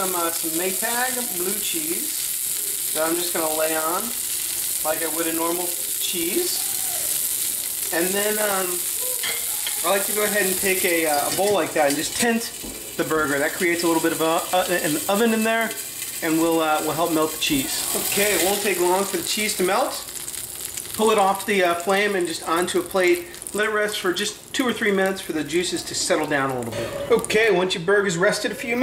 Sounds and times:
Sizzle: 0.0s - 28.8s.

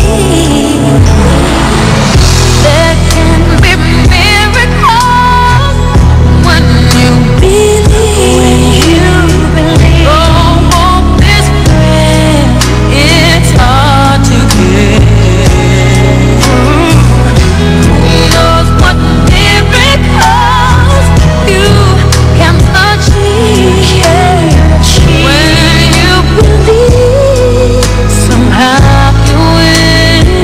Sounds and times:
Christian music: 0.0s - 30.4s.

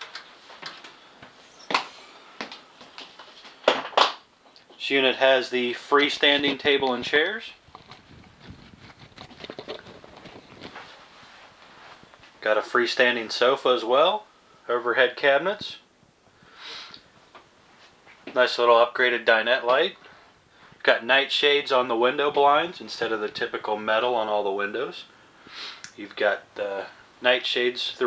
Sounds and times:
Inside, small room: 0.0s - 28.0s
Speech: 4.8s - 7.6s, 12.4s - 15.9s, 18.3s - 20.0s, 20.8s - 25.1s, 25.9s - 28.0s.

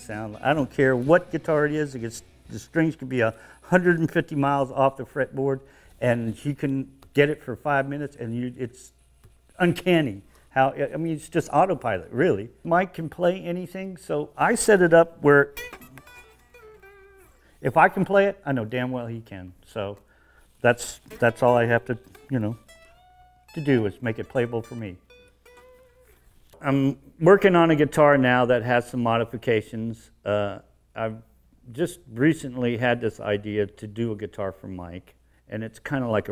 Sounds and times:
Speech: 0.0s - 9.0s, 9.6s - 15.6s, 17.6s - 20.0s, 20.6s - 22.6s, 23.6s - 25.0s, 26.6s - 36.3s
Strum: 14.4s - 17.5s, 20.8s - 26.7s
Electric guitar: 15.5s - 17.6s, 21.0s - 26.3s.

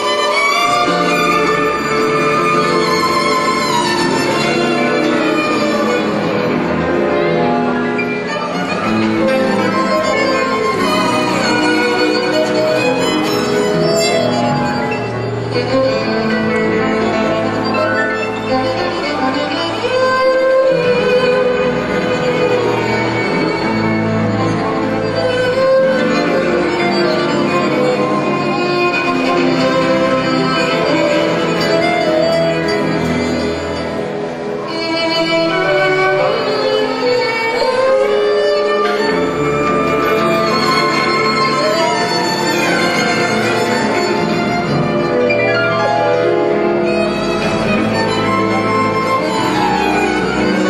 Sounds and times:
Violin, fiddle: 0.0s - 50.6s.

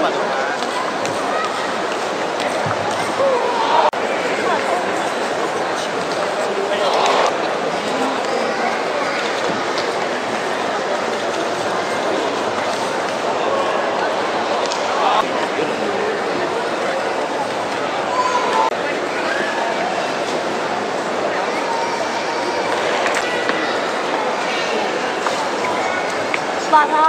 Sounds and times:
Speech: 0.0s - 27.0s.

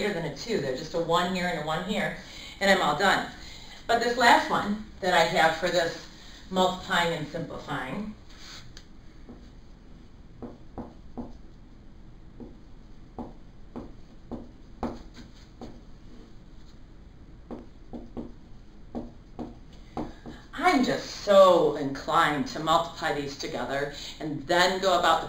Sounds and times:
Speech: 0.0s - 8.2s, 20.6s - 25.2s.

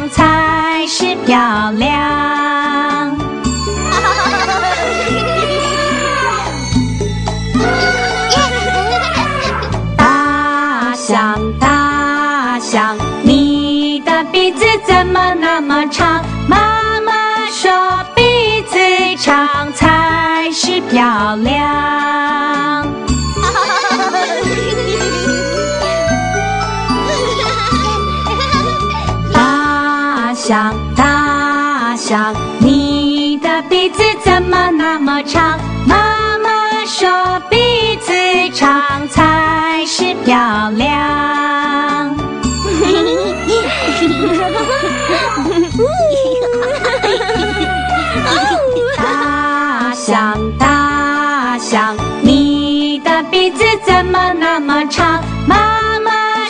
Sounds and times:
Music for children: 0.0s - 56.4s.

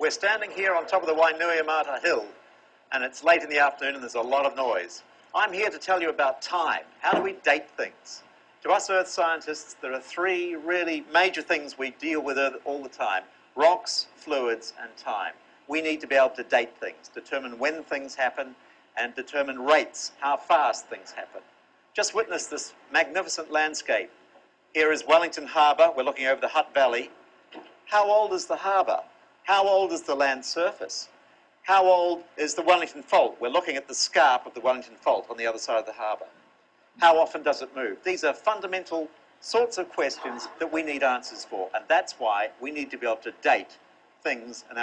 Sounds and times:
Speech: 0.0s - 24.2s, 24.8s - 27.2s, 27.9s - 31.1s, 31.7s - 36.4s, 37.0s - 44.8s.

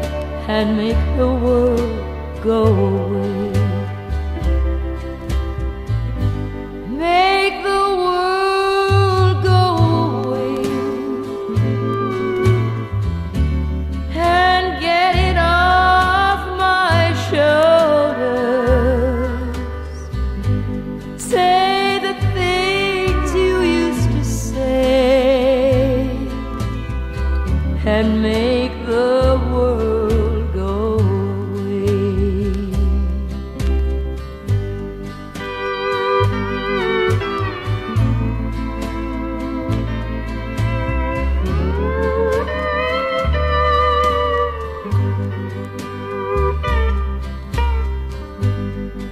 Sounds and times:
Music: 0.0s - 49.1s.

